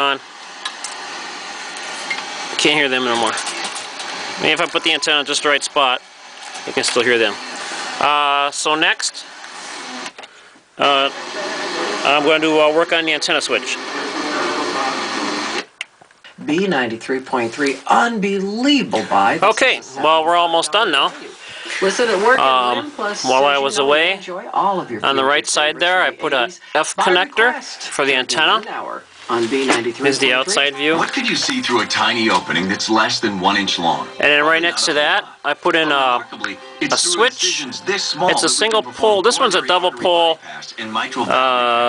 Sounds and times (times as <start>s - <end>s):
Radio: 0.0s - 0.3s, 1.0s - 10.2s, 10.8s - 15.7s, 19.0s - 41.8s
Speech: 2.6s - 3.6s, 4.4s - 6.0s, 6.6s - 7.4s, 10.8s - 11.2s, 11.8s - 15.3s, 16.4s - 41.8s.